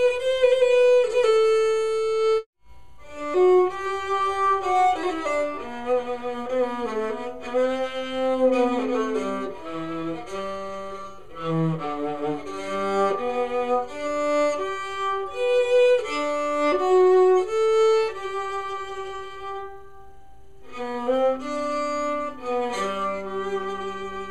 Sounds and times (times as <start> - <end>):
Bowed string instrument: 0.0 - 24.3
Plucked string instrument: 0.0 - 24.3.